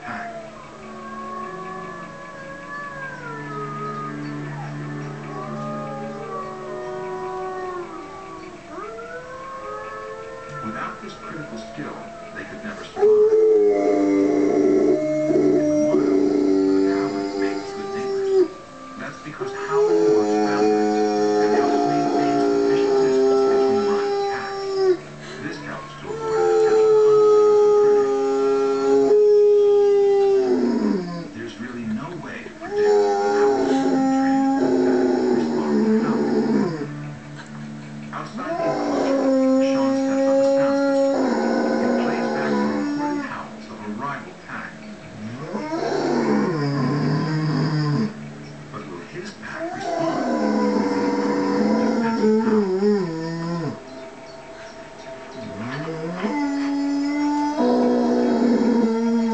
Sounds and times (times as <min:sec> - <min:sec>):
Speech: 0:00.0 - 0:00.4, 0:10.5 - 0:14.0, 0:15.5 - 0:36.8, 0:38.1 - 0:47.2, 0:48.7 - 0:53.1
Growling: 0:00.0 - 0:37.5, 0:38.1 - 0:48.3, 0:49.1 - 0:54.0, 0:55.4 - 0:59.3
Inside, small room: 0:00.0 - 0:59.3
Television: 0:00.0 - 0:59.3.